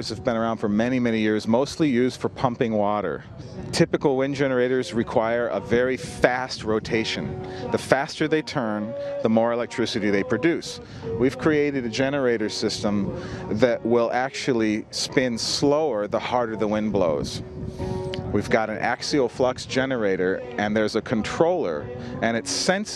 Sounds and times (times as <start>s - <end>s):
Speech: 0.0s - 17.4s, 18.3s - 22.9s
Music: 0.0s - 22.9s.